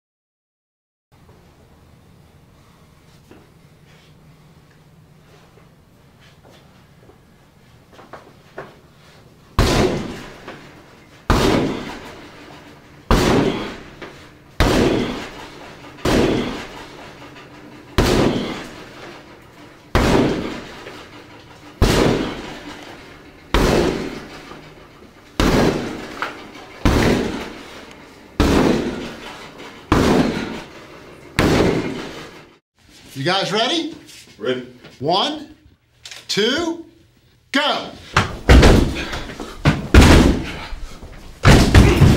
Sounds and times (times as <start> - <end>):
Slam: 9.6 - 10.6, 11.3 - 12.2, 13.1 - 13.9, 14.6 - 16.8, 18.0 - 18.8, 19.9 - 21.0, 21.8 - 22.7, 23.5 - 24.6, 25.4 - 26.2, 26.8 - 27.7, 28.4 - 29.3, 29.9 - 30.6, 31.4 - 32.2, 38.2 - 40.7, 41.4 - 42.1.